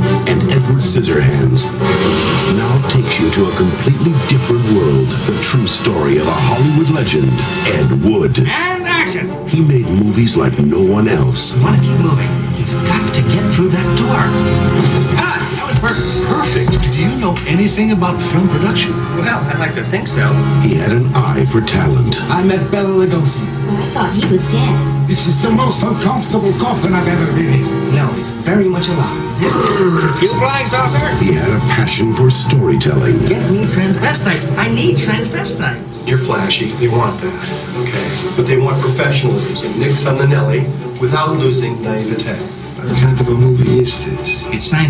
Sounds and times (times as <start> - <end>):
Music: 0.0 - 44.8
Speech: 0.2 - 1.8, 2.4 - 14.4, 15.2 - 44.8.